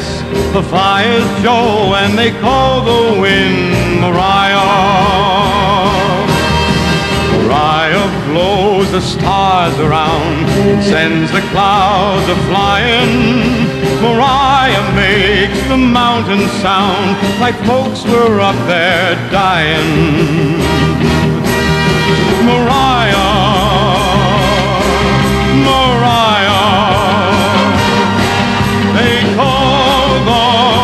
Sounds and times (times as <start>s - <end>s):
Music: 0.0s - 30.8s.